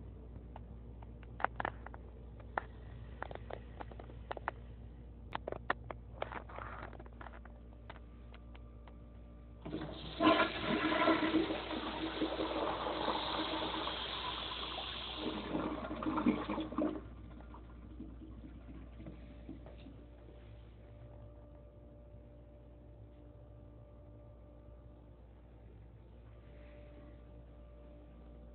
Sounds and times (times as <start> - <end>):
Toilet flush: 9.6 - 19.6.